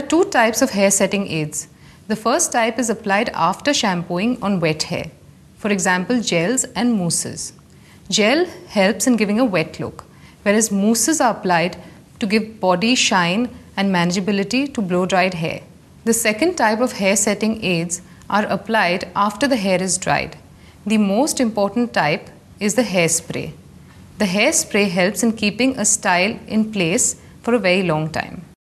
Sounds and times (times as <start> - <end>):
Speech: 0.0 - 23.6, 24.2 - 28.6.